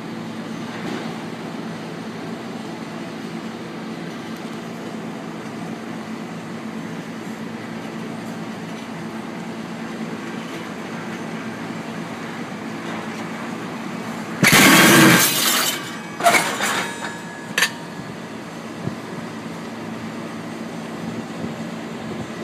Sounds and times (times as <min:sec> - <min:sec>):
Railroad car, train wagon: 0:00.0 - 0:22.4
Train: 0:00.0 - 0:22.4.